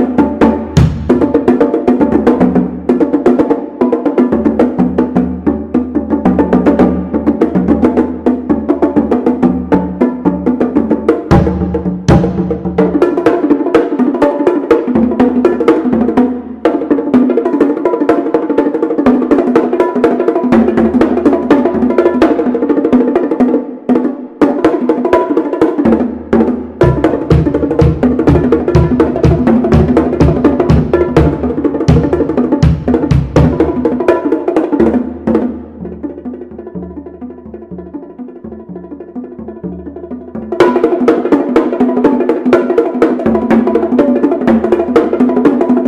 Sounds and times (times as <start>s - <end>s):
Bass drum: 0.0s - 2.9s, 10.6s - 13.1s, 25.9s - 40.9s.